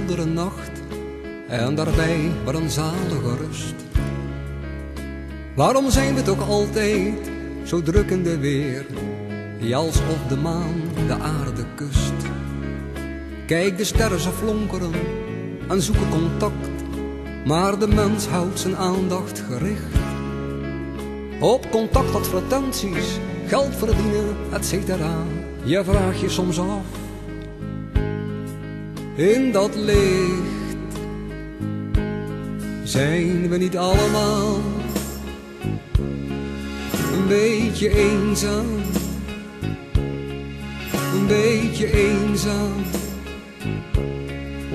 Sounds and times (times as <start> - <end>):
Music: 0.0 - 44.7.